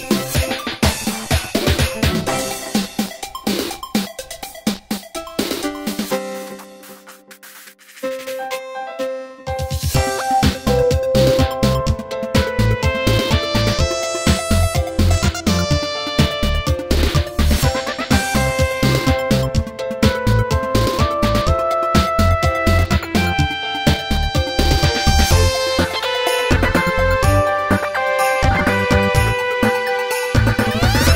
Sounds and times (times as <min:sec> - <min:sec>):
Music: 0:00.0 - 0:31.1.